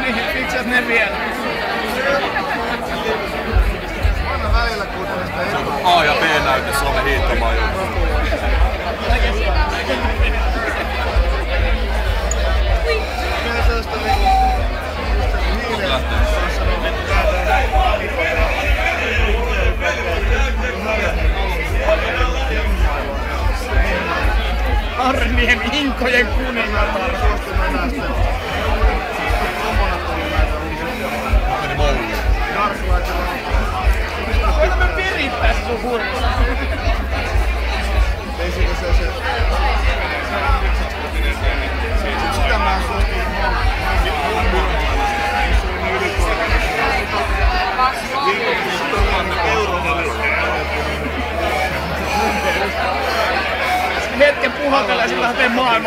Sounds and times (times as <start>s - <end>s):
Speech: 0.0s - 55.8s
Music: 3.2s - 55.8s.